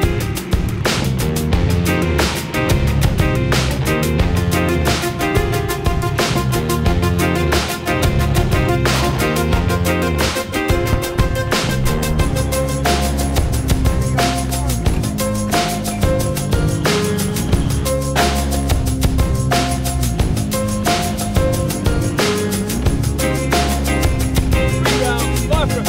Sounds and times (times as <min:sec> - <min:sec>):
Music: 0:00.0 - 0:25.8
Speech: 0:24.8 - 0:25.8.